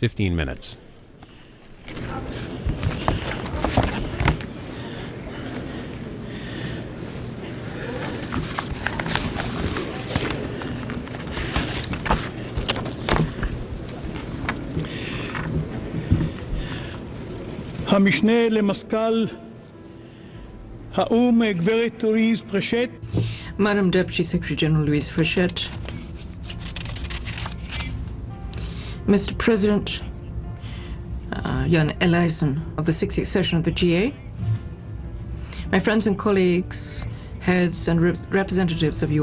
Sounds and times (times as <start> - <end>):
Male speech, man speaking: 0.0 - 0.8, 17.9 - 19.5, 21.0 - 23.0
Female speech, woman speaking: 23.6 - 25.8, 29.1 - 30.1, 31.3 - 34.2, 35.7 - 39.2.